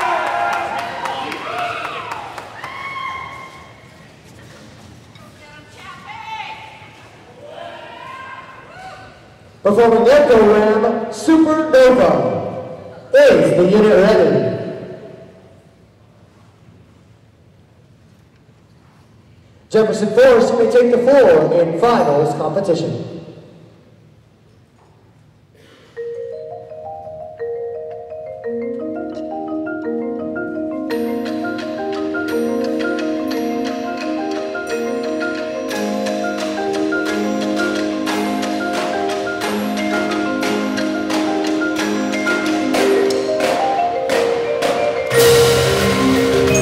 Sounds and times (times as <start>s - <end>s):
Glockenspiel: 26.0s - 46.6s
Marimba, xylophone: 26.0s - 46.6s.